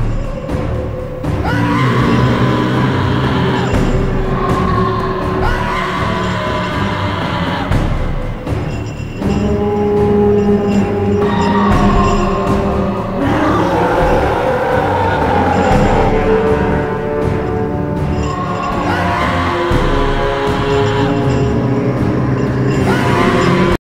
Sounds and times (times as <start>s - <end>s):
Music: 0.0s - 23.8s.